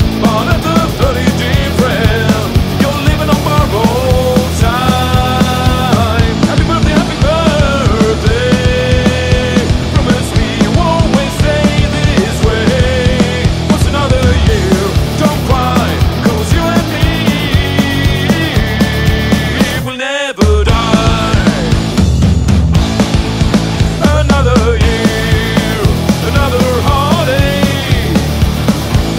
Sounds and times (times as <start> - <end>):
Music: 0.0 - 29.1.